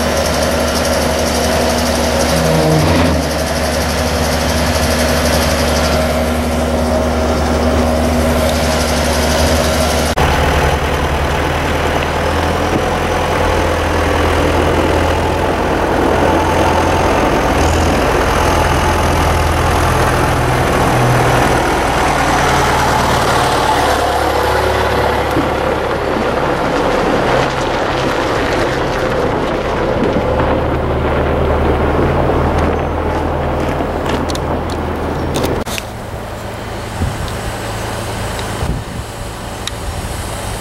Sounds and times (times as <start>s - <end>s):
Truck: 0.0s - 40.6s.